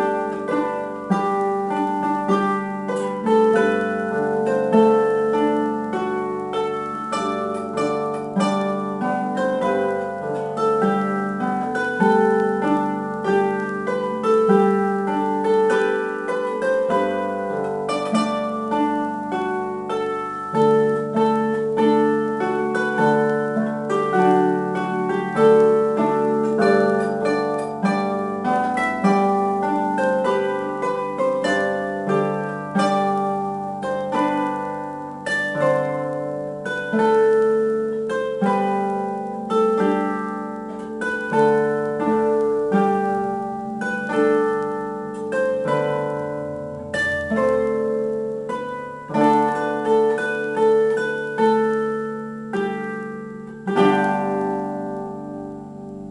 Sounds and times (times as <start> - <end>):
Harp: 0.0 - 56.1
Plucked string instrument: 0.0 - 56.1.